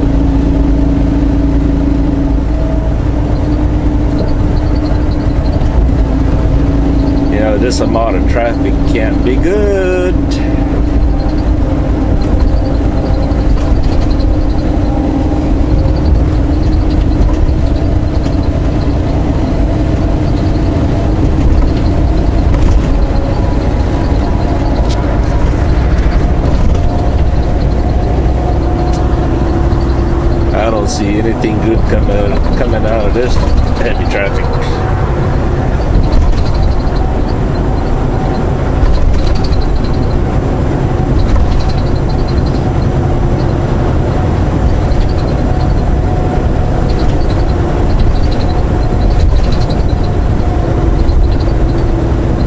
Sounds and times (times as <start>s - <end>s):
Bus: 0.0s - 52.4s
Car: 0.0s - 52.4s.